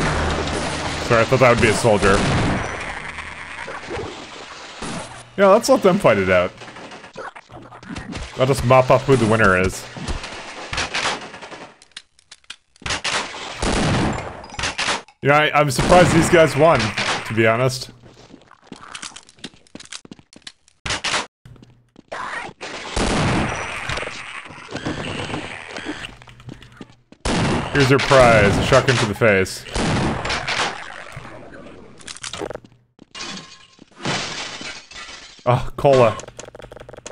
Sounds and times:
Speech: 1.0s - 2.2s, 5.4s - 6.5s, 8.4s - 9.9s, 15.2s - 17.9s, 27.8s - 29.7s, 35.5s - 36.2s.

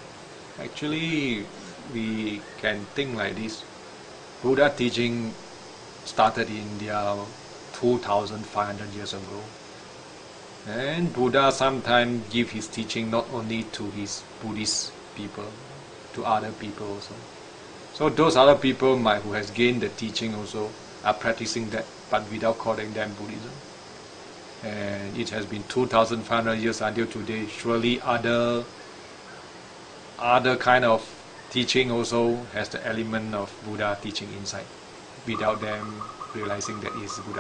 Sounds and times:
Speech: 0.6s - 3.7s, 4.4s - 5.4s, 6.1s - 9.6s, 10.6s - 17.3s, 18.0s - 23.7s, 24.6s - 28.7s, 30.2s - 37.4s.

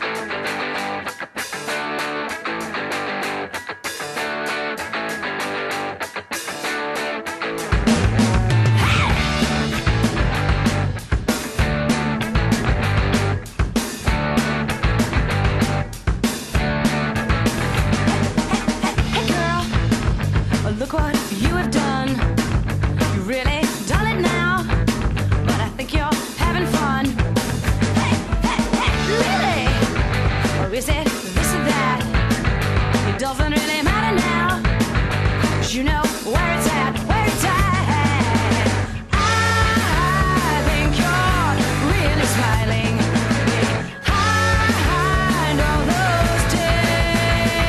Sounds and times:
Music: 0.0s - 47.6s.

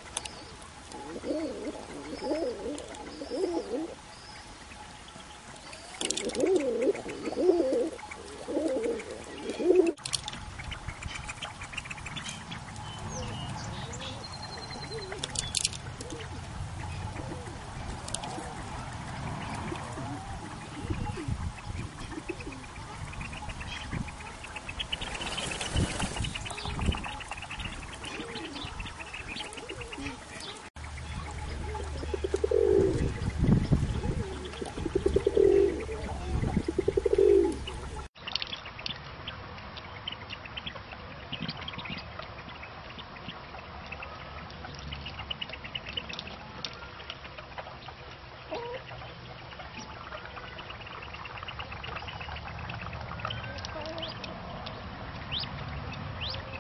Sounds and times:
Pigeon, dove: 0.9s - 4.0s, 5.5s - 30.6s, 33.9s - 38.1s, 43.0s - 54.8s.

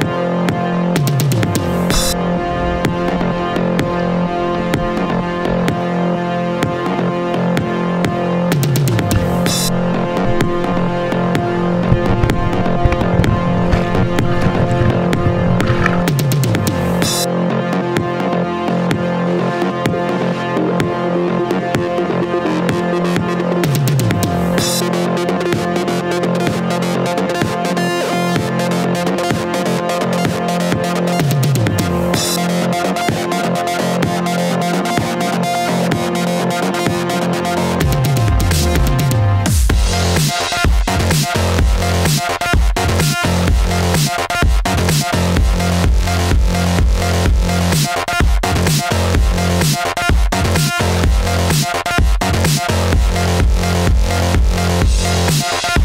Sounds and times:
Music: 0.0s - 55.8s.

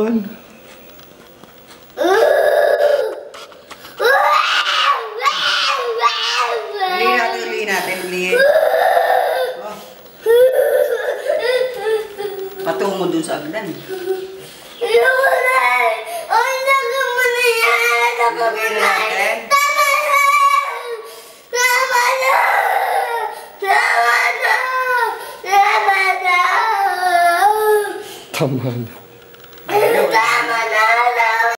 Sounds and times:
Baby cry, infant cry: 2.0s - 3.4s, 8.3s - 12.4s, 21.6s - 28.0s.

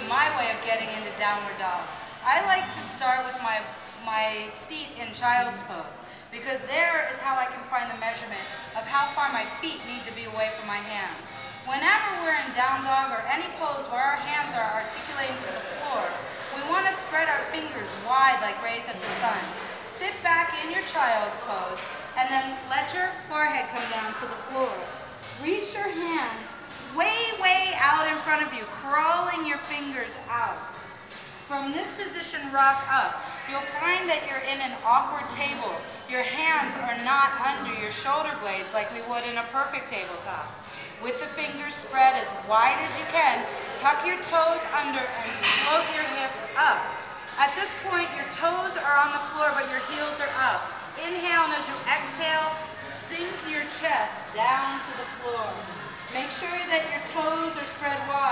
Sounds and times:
Speech: 0.0s - 30.7s, 41.0s - 58.3s.

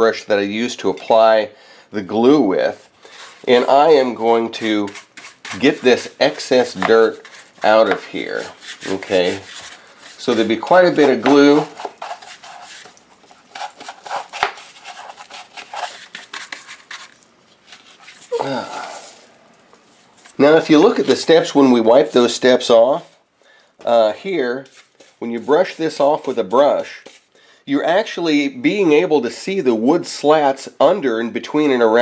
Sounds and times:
Speech: 0.0s - 9.5s, 10.2s - 11.7s, 20.4s - 23.2s, 23.8s - 27.1s, 27.7s - 32.0s.

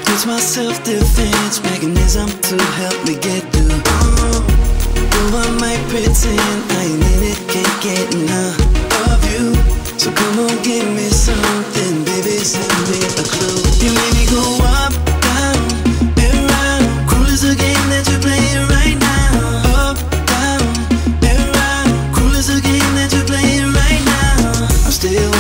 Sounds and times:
Music: 0.0s - 25.4s.

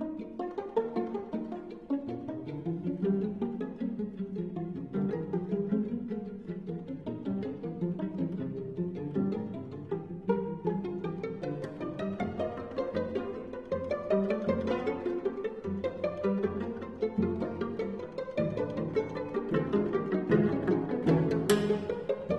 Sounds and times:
Pizzicato: 0.0s - 22.3s.

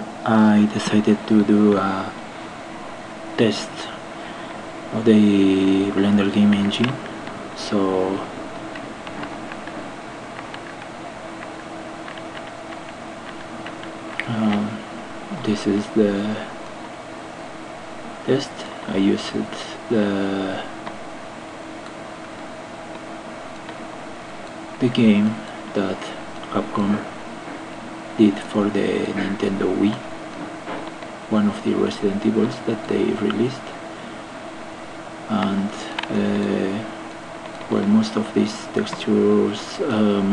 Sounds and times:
Speech: 0.2s - 2.2s, 3.4s - 4.0s, 4.9s - 8.4s, 14.2s - 16.6s, 18.3s - 20.8s, 24.8s - 27.1s, 28.2s - 30.1s, 31.3s - 33.8s, 35.3s - 36.9s, 37.7s - 40.3s.

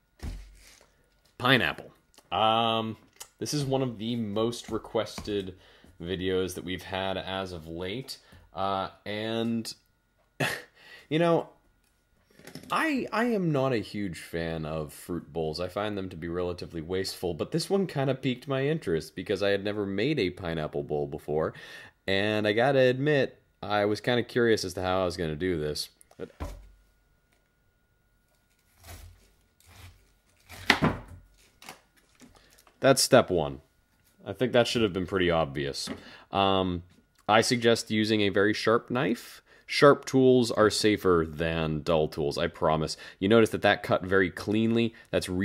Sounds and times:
Inside, small room: 0.0s - 45.4s
Speech: 1.4s - 9.8s, 11.1s - 11.6s, 12.7s - 26.4s, 32.8s - 33.6s, 34.2s - 45.4s.

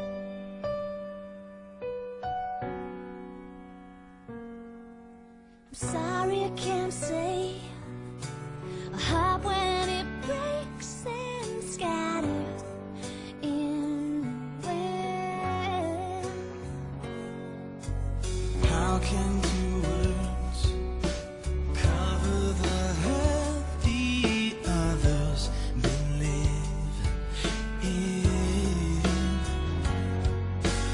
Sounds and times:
Music: 0.0s - 30.9s.

